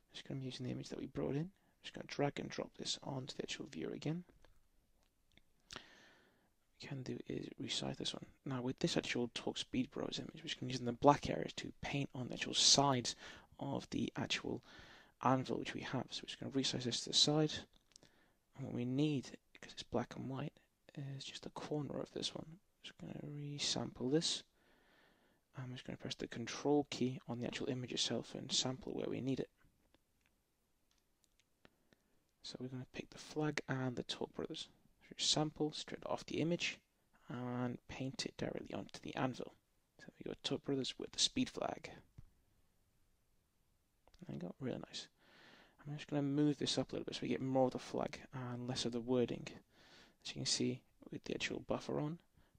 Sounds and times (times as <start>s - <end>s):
Speech: 0.0s - 4.4s, 6.8s - 14.6s, 15.2s - 17.7s, 18.6s - 24.5s, 25.6s - 29.5s, 32.4s - 42.0s, 44.2s - 45.1s, 45.8s - 49.6s, 50.2s - 52.3s.